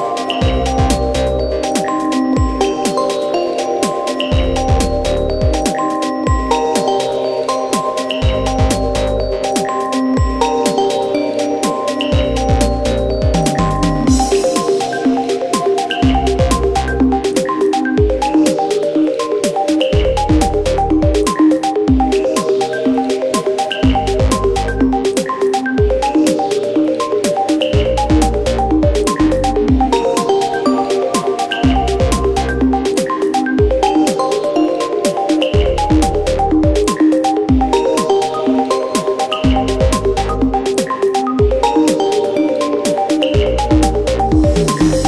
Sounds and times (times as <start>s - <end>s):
Music: 0.0s - 45.0s.